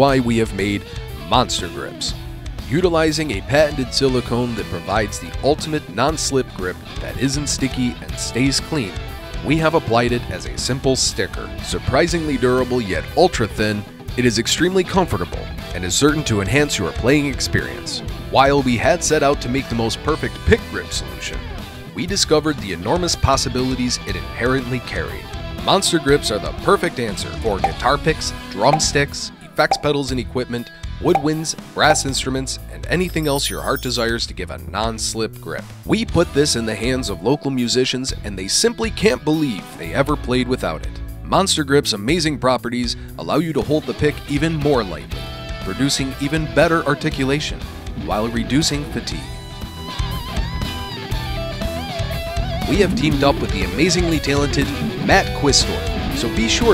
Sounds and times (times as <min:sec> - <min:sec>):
Speech: 0:00.0 - 0:49.4, 0:52.6 - 0:56.7
Guitar: 0:00.0 - 0:56.7.